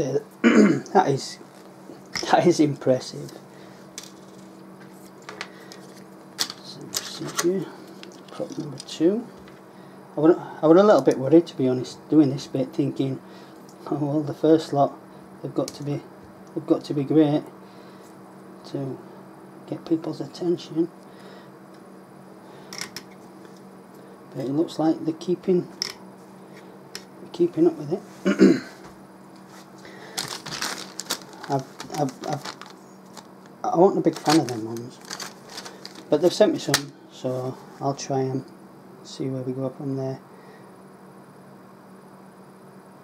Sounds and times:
Speech: 0.0 - 1.4, 2.2 - 3.4, 6.6 - 9.3, 10.2 - 13.2, 13.8 - 17.5, 18.6 - 19.0, 19.7 - 20.9, 24.3 - 25.7, 27.3 - 28.1, 31.5 - 32.5, 33.6 - 35.1, 36.1 - 40.2
Inside, small room: 0.0 - 43.0.

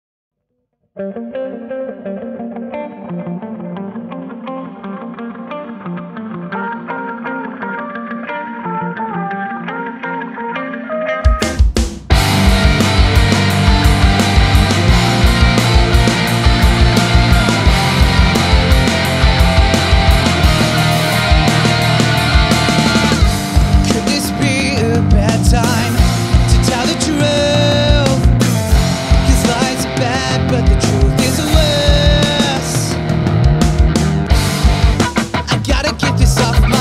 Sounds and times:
Funk: 11.2 - 36.8.

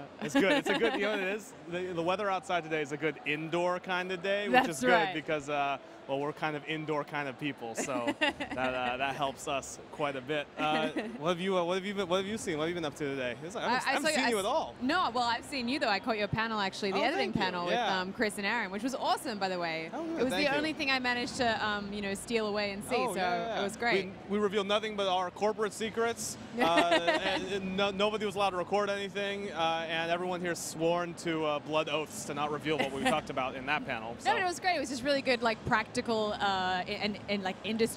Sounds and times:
Speech: 0.2 - 16.0, 16.7 - 35.5.

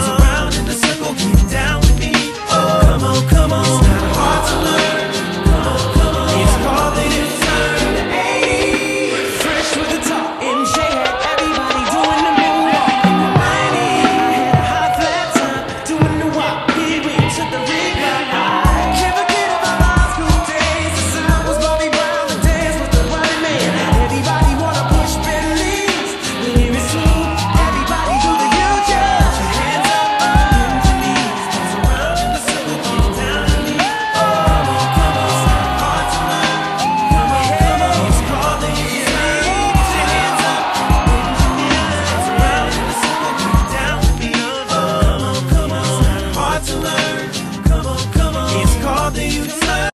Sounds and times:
Rhythm and blues: 0.0 - 49.9.

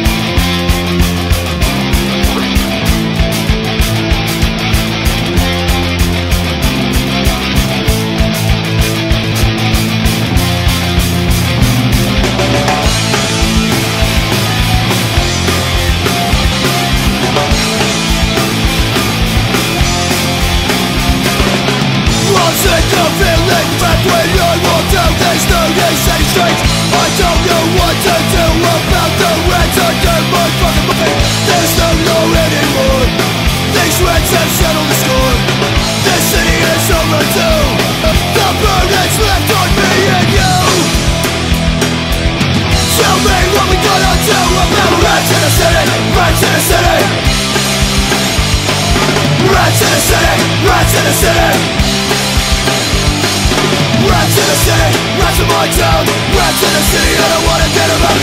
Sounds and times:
Music: 0.0 - 58.2.

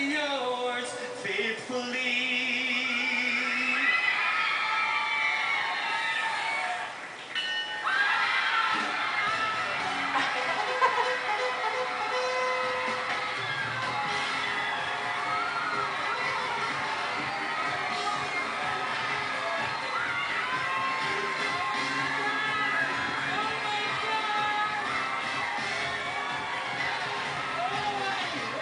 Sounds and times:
Music: 8.7 - 28.6.

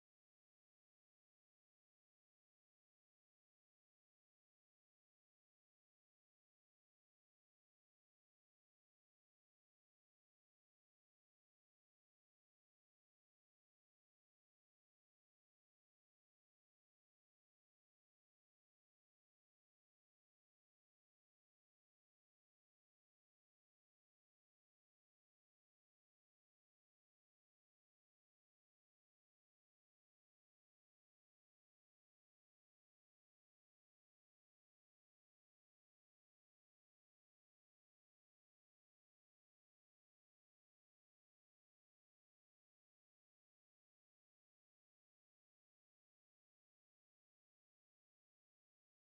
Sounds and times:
Silence: 0.0 - 49.0.

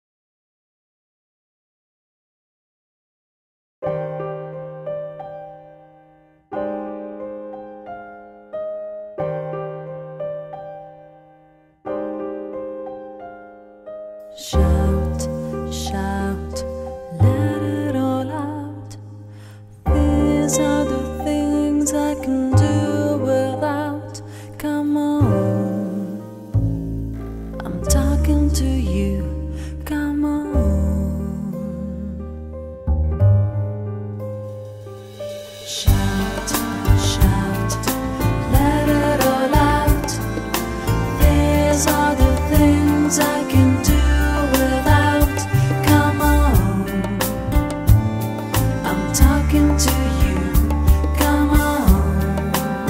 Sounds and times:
Music: 3.8 - 52.9.

